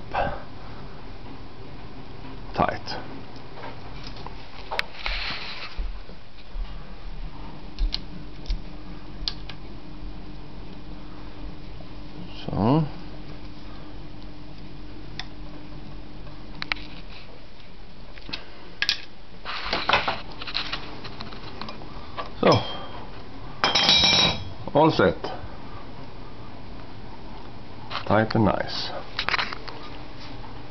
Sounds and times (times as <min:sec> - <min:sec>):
Speech: 0:02.5 - 0:03.1, 0:12.2 - 0:13.0, 0:24.7 - 0:25.4, 0:28.0 - 0:29.1.